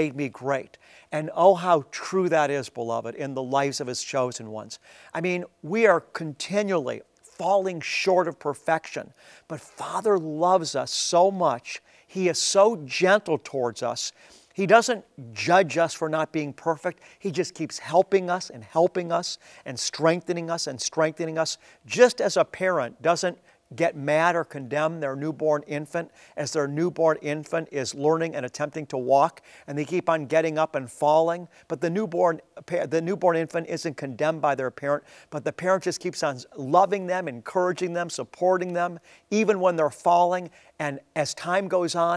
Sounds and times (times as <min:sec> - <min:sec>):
Speech: 0:00.0 - 0:42.1.